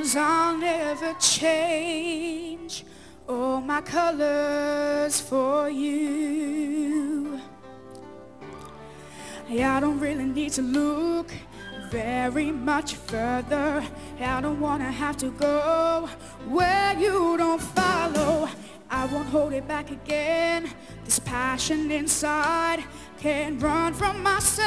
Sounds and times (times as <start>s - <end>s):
Male singing: 0.0s - 7.5s, 9.5s - 24.6s
Music: 0.0s - 24.6s.